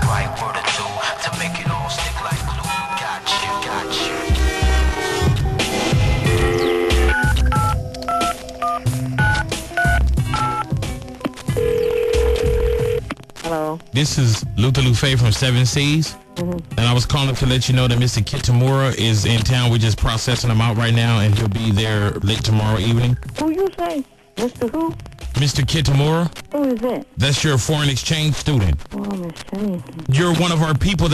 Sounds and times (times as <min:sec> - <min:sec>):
Speech: 0:00.0 - 0:04.2, 0:13.5 - 0:31.1
Music: 0:00.0 - 0:31.1.